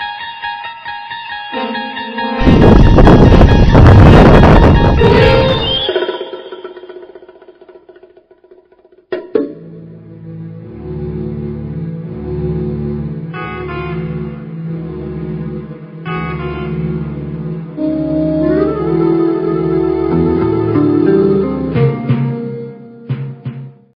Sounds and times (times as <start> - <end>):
Music: 0.0 - 23.9.